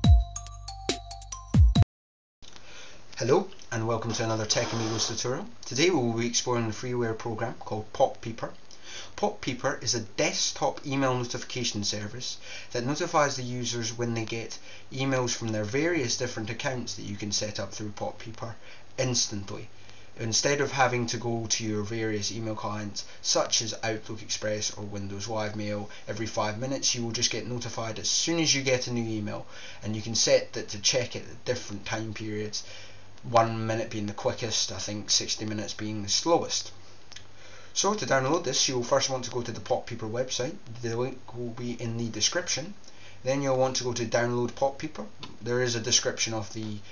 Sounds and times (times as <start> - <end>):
Speech: 3.1 - 8.6, 9.2 - 36.8, 37.8 - 46.8.